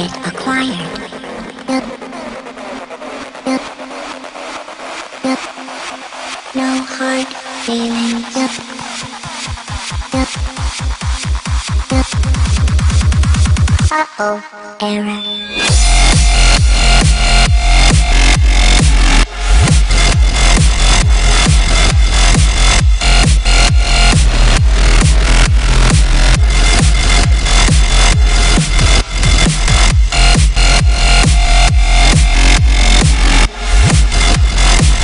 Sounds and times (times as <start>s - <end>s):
Dubstep: 0.0s - 14.0s, 14.8s - 35.0s.